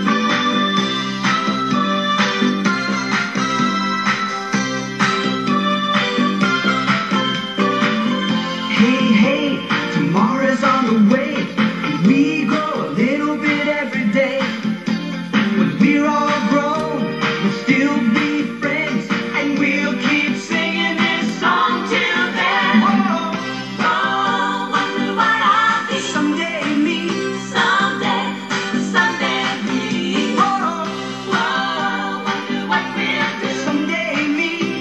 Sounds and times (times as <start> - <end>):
Music: 0.0 - 34.8.